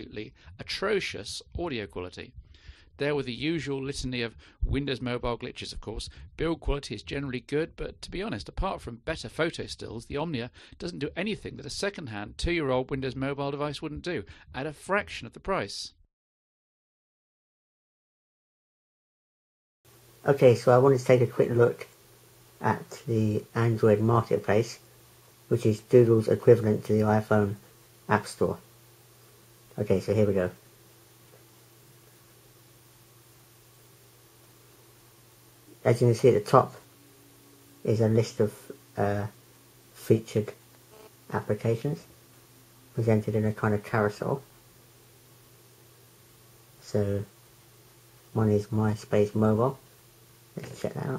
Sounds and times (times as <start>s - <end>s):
Speech: 0.0s - 2.4s, 3.0s - 16.0s, 20.2s - 22.0s, 22.6s - 24.8s, 25.5s - 28.6s, 29.7s - 30.6s, 35.8s - 36.9s, 37.8s - 39.4s, 40.0s - 40.6s, 41.3s - 42.1s, 43.0s - 44.5s, 46.8s - 47.3s, 48.4s - 49.8s, 50.6s - 51.1s.